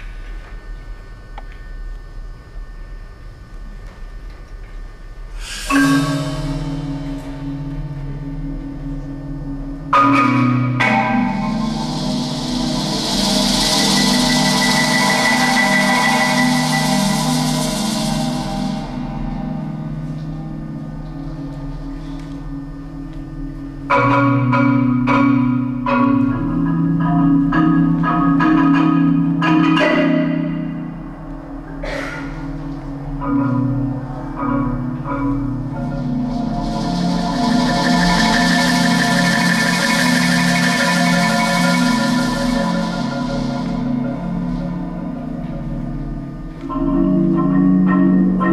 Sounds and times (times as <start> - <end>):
Percussion: 3.6 - 48.5.